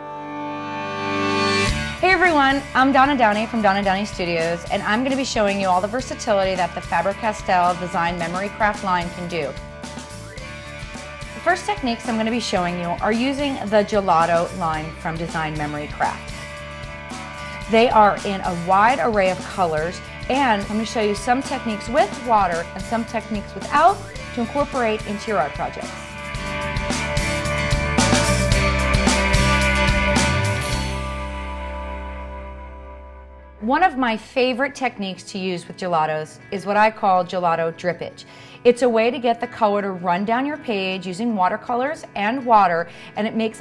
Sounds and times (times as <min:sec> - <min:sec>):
Music: 0:00.0 - 0:43.6
Speech: 0:02.0 - 0:09.6, 0:11.4 - 0:16.2, 0:17.7 - 0:26.0, 0:33.6 - 0:43.6.